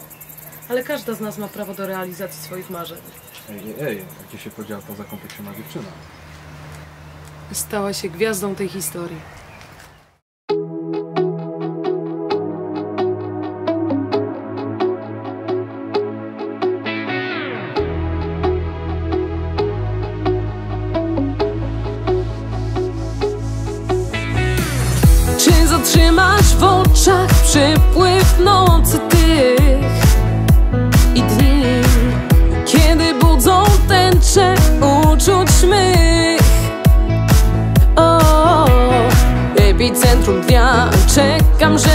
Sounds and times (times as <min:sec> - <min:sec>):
Music: 0:10.5 - 0:41.9.